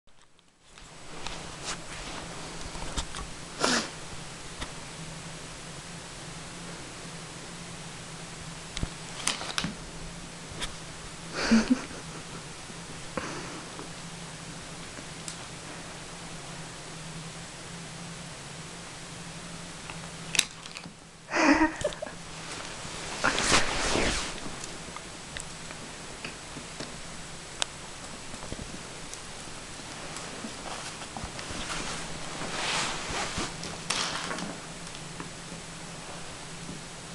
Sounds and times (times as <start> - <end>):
Inside, small room: 0.0 - 37.1.